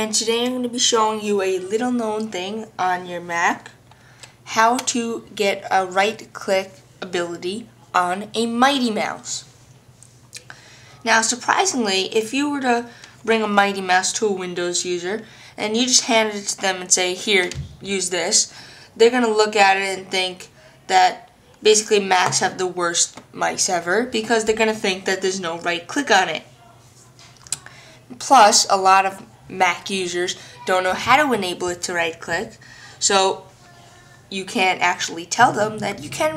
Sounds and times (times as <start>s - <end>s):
Speech: 0.0s - 3.8s, 4.5s - 9.5s, 11.0s - 36.3s.